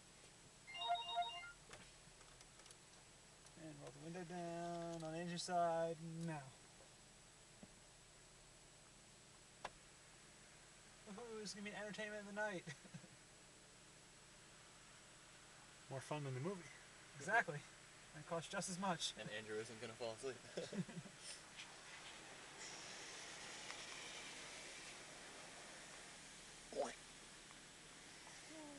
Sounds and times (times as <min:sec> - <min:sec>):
Speech: 0:03.6 - 0:06.6, 0:11.0 - 0:12.7, 0:15.9 - 0:20.4, 0:26.7 - 0:27.0.